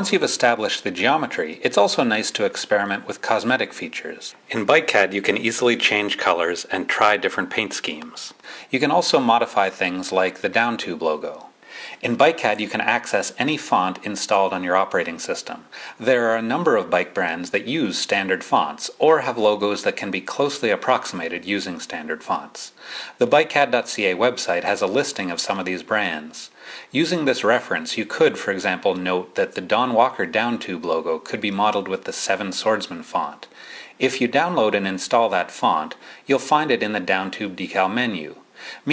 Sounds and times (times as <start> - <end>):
Speech: 0.0 - 38.9.